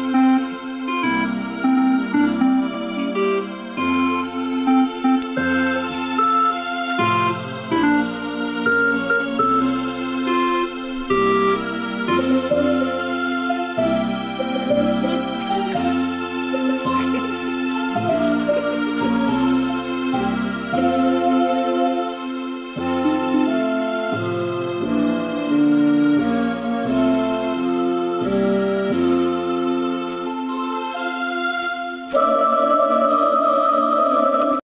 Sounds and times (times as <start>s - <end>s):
Harpsichord: 0.0s - 30.5s, 32.1s - 34.6s.